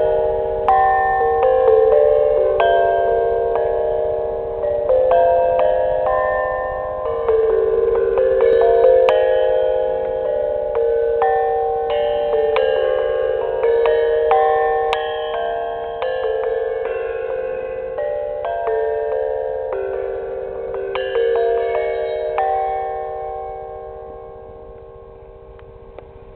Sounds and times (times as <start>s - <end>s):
Gong: 0.0s - 26.3s.